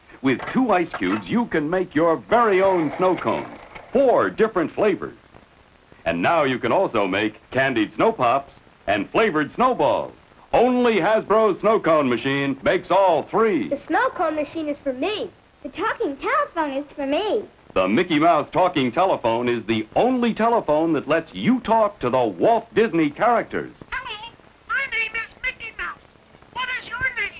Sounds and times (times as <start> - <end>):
Speech: 0.2 - 5.2, 6.1 - 26.0, 26.6 - 27.4.